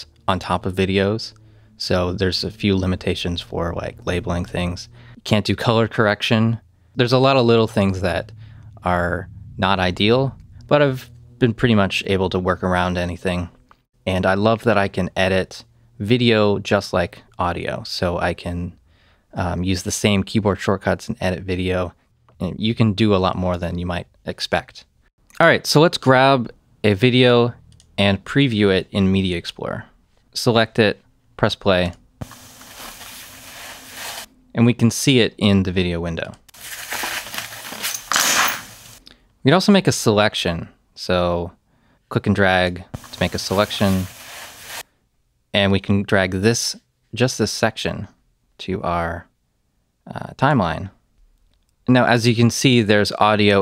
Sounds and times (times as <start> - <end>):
Speech: 0.0 - 32.0, 34.5 - 36.4, 39.4 - 44.1, 45.5 - 49.3, 50.0 - 51.0, 51.8 - 53.6.